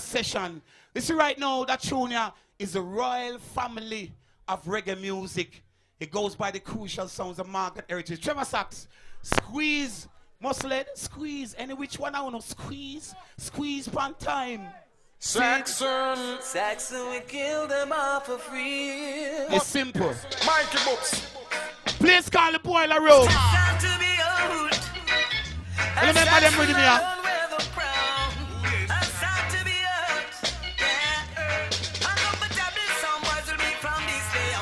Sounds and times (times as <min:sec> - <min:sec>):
Speech: 0:00.0 - 0:15.6, 0:19.5 - 0:20.3, 0:22.0 - 0:23.6, 0:26.0 - 0:27.0
Music: 0:16.4 - 0:22.4, 0:23.1 - 0:34.6.